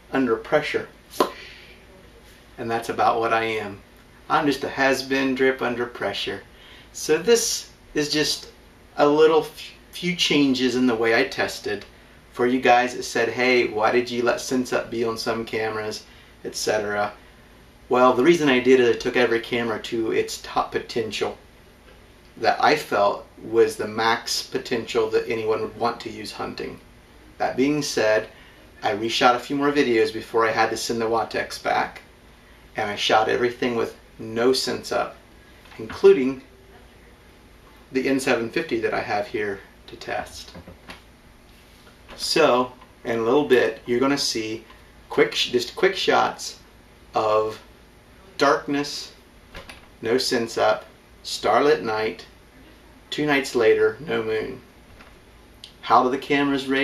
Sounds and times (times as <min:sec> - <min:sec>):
Speech: 0:00.0 - 0:17.2, 0:17.9 - 0:21.4, 0:22.4 - 0:26.8, 0:27.4 - 0:32.1, 0:32.8 - 0:37.1, 0:37.9 - 0:40.6, 0:42.1 - 0:49.2, 0:50.0 - 0:54.7, 0:55.7 - 0:56.8.